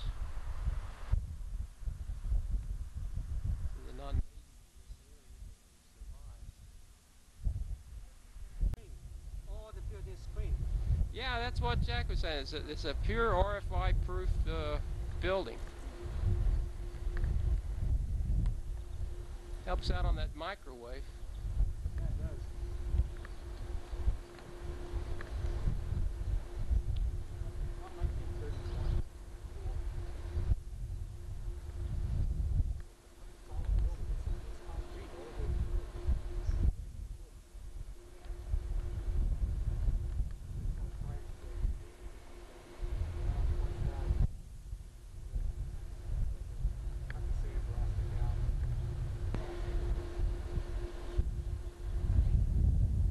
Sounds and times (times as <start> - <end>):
Speech: 3.8 - 5.4, 8.8 - 10.6, 11.2 - 15.6, 19.7 - 21.1, 27.4 - 28.8, 33.2 - 35.6.